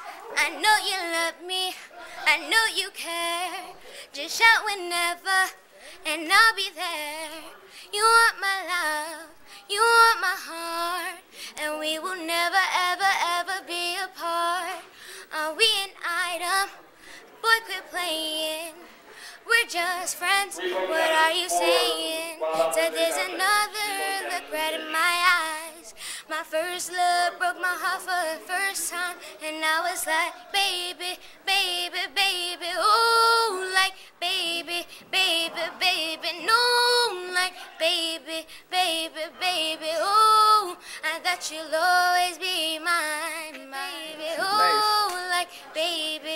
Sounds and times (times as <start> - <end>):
Child singing: 0.0 - 14.8, 19.5 - 46.3
Female singing: 0.0 - 46.3.